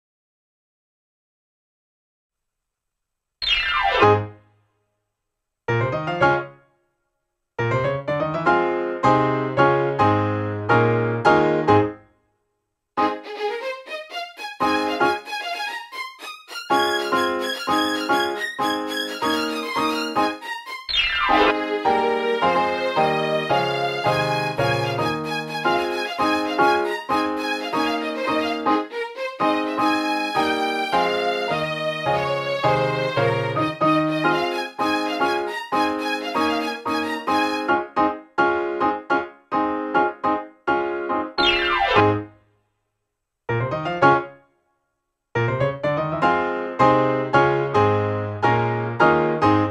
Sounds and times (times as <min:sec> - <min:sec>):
Piano: 0:03.4 - 0:04.4, 0:05.7 - 0:07.0, 0:07.6 - 0:12.2, 0:13.0 - 0:42.4, 0:43.5 - 0:44.6, 0:45.4 - 0:49.7.